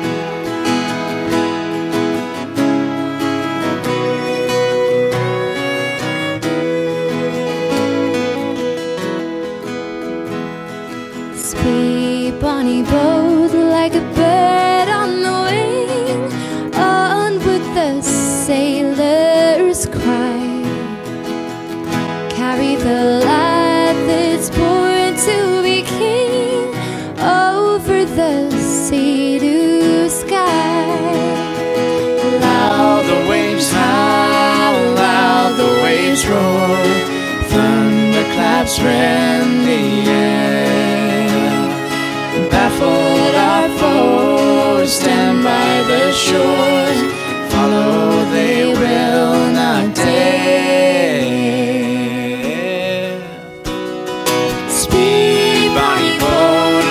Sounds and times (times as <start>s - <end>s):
Music: 0.0s - 56.9s.